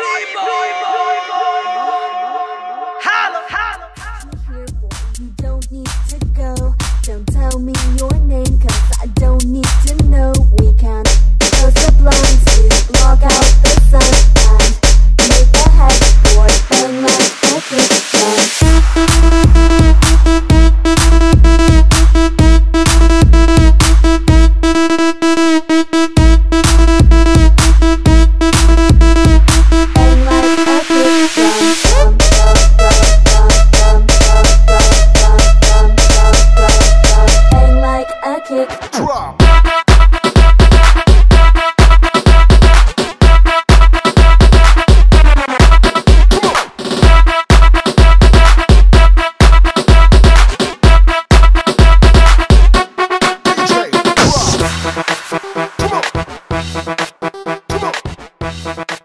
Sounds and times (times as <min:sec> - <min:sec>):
Dance music: 0:00.0 - 0:59.0.